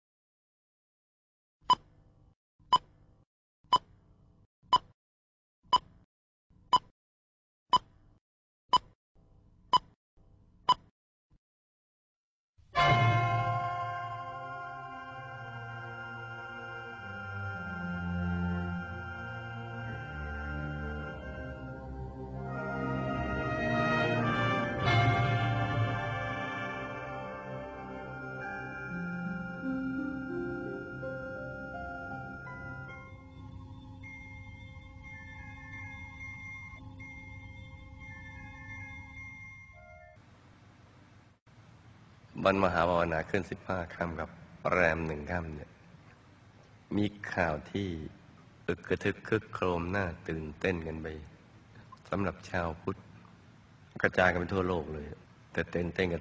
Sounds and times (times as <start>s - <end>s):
Music: 12.8s - 40.2s.